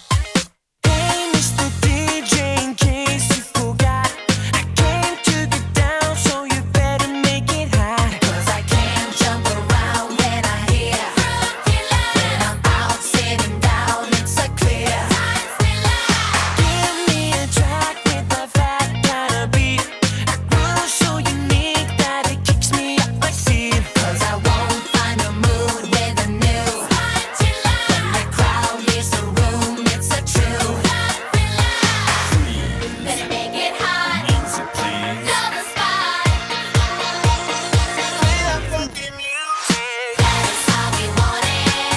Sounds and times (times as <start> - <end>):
Music: 0.0 - 41.9
Singing: 0.9 - 4.1, 4.8 - 19.9, 20.5 - 41.9.